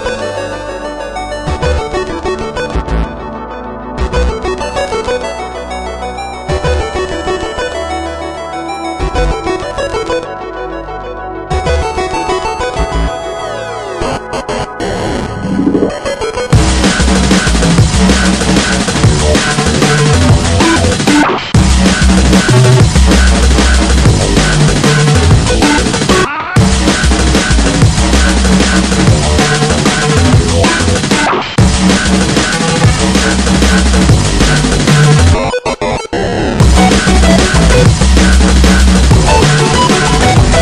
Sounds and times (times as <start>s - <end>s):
Music: 0.0s - 40.6s.